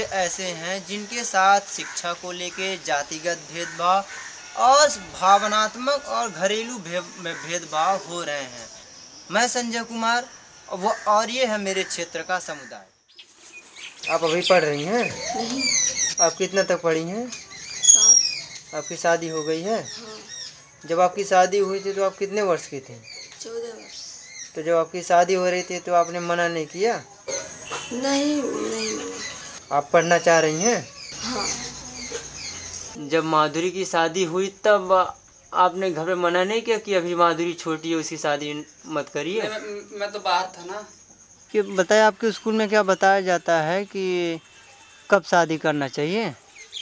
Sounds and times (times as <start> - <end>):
Chirp, tweet: 13.0 - 20.9, 46.5 - 46.8.